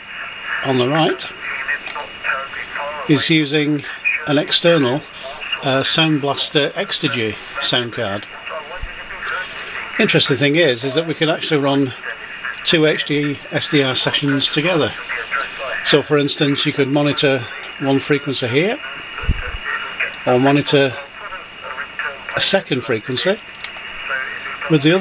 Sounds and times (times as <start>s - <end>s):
Speech: 0.6s - 23.4s, 24.0s - 25.0s.